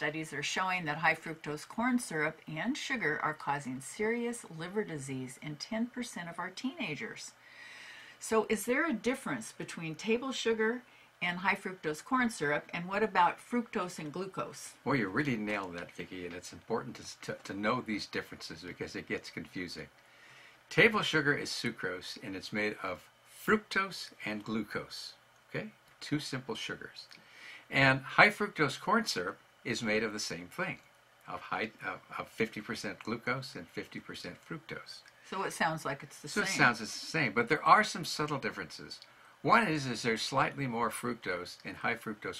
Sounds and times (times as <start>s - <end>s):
Speech: 0.0s - 7.4s, 8.2s - 19.9s, 20.7s - 42.3s.